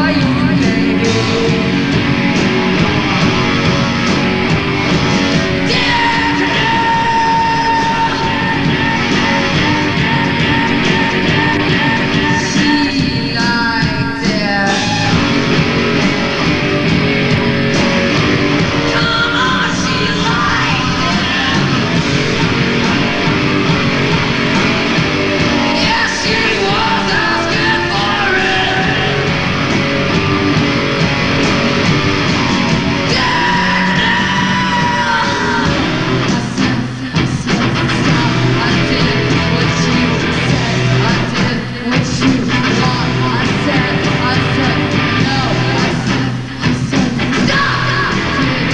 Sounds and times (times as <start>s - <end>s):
Singing: 0.0s - 1.9s, 5.6s - 15.4s, 18.8s - 22.2s, 25.3s - 29.4s, 33.0s - 48.7s
Grunge: 0.0s - 48.7s
Rock and roll: 0.0s - 48.7s.